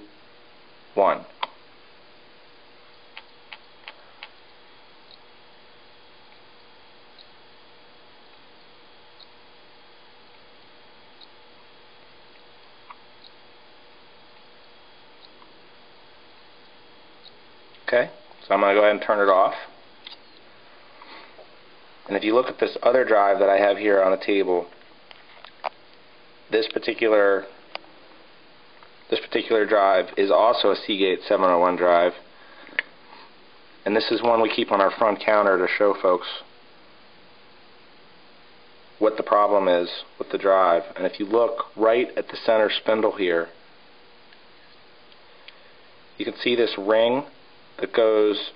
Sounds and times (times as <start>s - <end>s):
Speech: 1.0s - 1.4s, 17.9s - 19.8s, 22.1s - 24.8s, 26.5s - 27.6s, 29.1s - 32.3s, 33.8s - 36.5s, 39.0s - 43.6s, 46.2s - 48.5s.